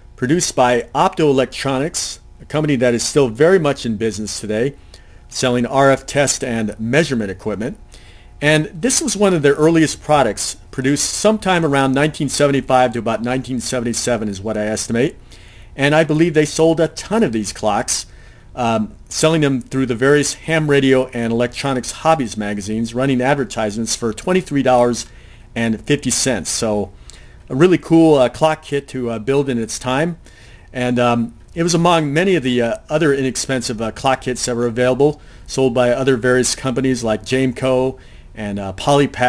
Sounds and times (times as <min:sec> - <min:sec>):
Speech: 0:00.2 - 0:07.8, 0:08.4 - 0:15.2, 0:15.8 - 0:26.9, 0:27.5 - 0:39.2.